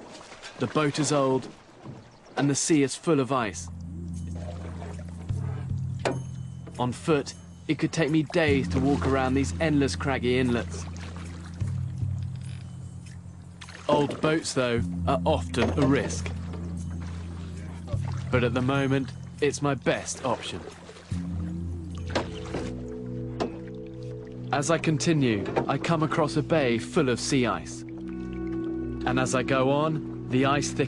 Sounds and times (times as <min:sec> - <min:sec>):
Speech: 0:00.6 - 0:01.5, 0:02.4 - 0:03.7, 0:06.8 - 0:10.9, 0:13.9 - 0:16.3, 0:17.6 - 0:20.6, 0:24.5 - 0:27.8, 0:29.0 - 0:30.8
Music: 0:03.1 - 0:30.8.